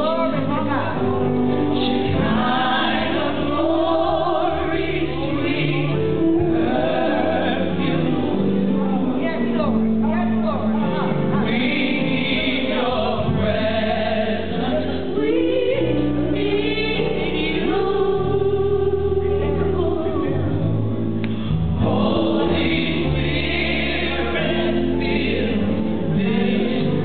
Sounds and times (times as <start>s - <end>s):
Speech: 0.0s - 1.5s, 8.6s - 11.9s, 19.2s - 20.6s
Music: 0.0s - 27.0s.